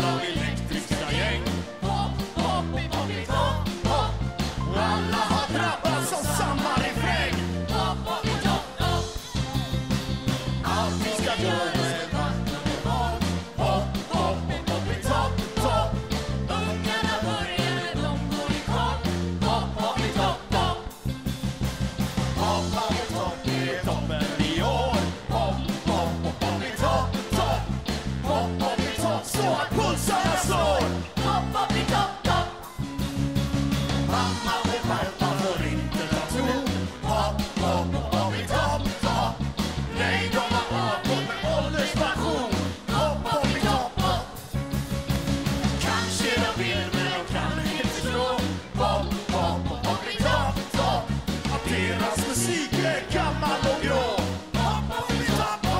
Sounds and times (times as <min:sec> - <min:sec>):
Music: 0:00.0 - 0:55.8.